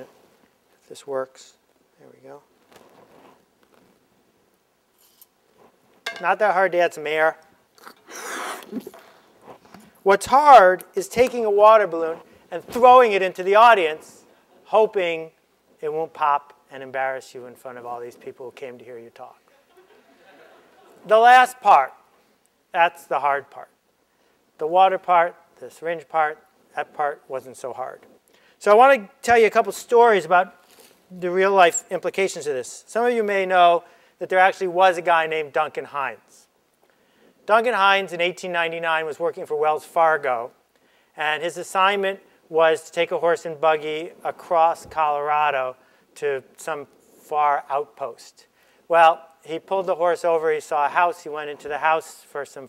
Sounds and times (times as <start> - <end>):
Speech: 0.8 - 2.5, 6.2 - 7.4, 10.0 - 19.4, 21.0 - 22.0, 22.8 - 23.8, 24.6 - 36.5, 37.5 - 40.6, 41.2 - 52.6
Inside, large room or hall: 7.2 - 17.7.